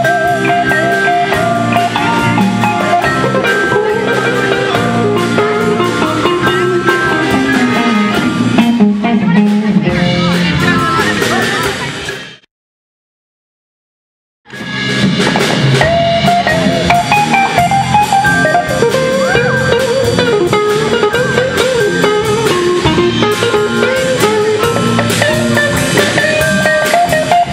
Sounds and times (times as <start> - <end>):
Electric guitar: 0.0 - 12.4, 14.5 - 27.5
Speech: 9.1 - 12.2.